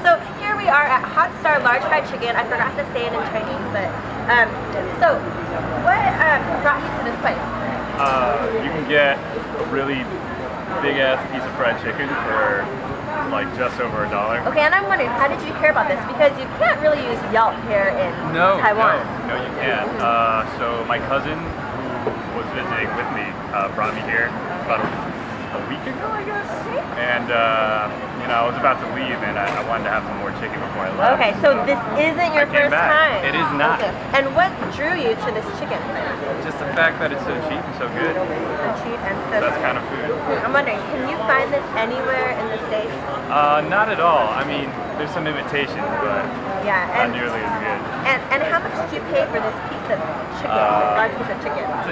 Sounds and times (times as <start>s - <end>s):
Speech: 18.3s - 24.9s, 50.5s - 51.9s.